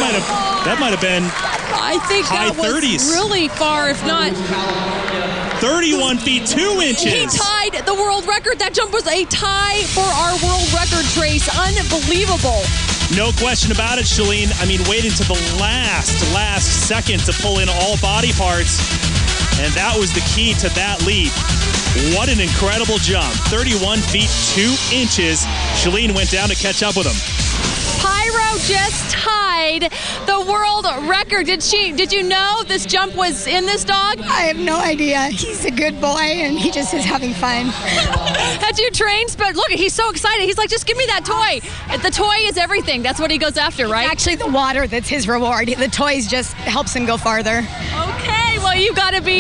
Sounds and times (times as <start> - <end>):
Music: 0.0 - 49.4.